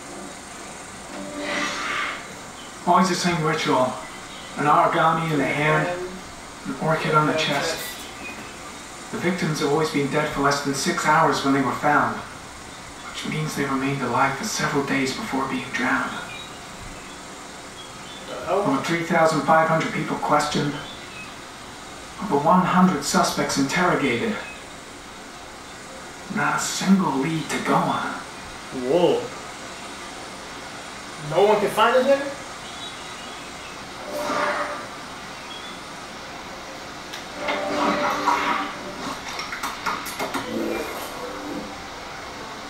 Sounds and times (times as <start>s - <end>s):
Rain on surface: 0.0s - 42.6s
Speech: 2.8s - 4.0s, 4.6s - 8.1s, 9.1s - 12.3s, 13.1s - 16.4s, 18.3s - 20.9s, 22.2s - 24.6s, 26.3s - 29.4s, 31.2s - 32.4s.